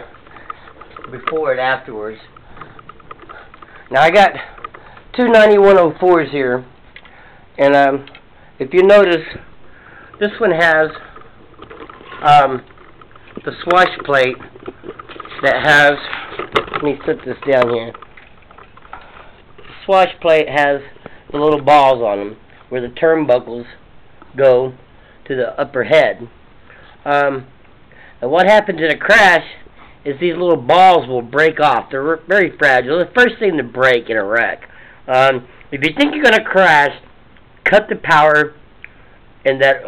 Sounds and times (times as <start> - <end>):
Speech: 1.1 - 2.3, 3.9 - 4.5, 5.1 - 6.7, 7.6 - 9.5, 10.2 - 11.1, 12.2 - 12.7, 13.4 - 14.5, 15.4 - 16.2, 16.8 - 18.0, 19.7 - 26.4, 27.0 - 27.5, 28.2 - 38.6, 39.4 - 39.8.